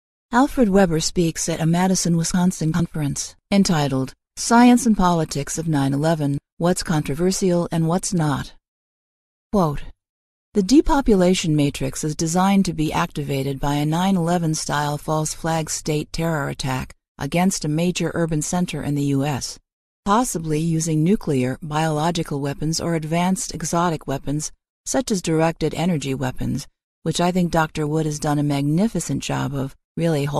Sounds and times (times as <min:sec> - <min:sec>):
Speech: 0:00.4 - 0:08.6, 0:09.6 - 0:09.9, 0:10.6 - 0:30.4.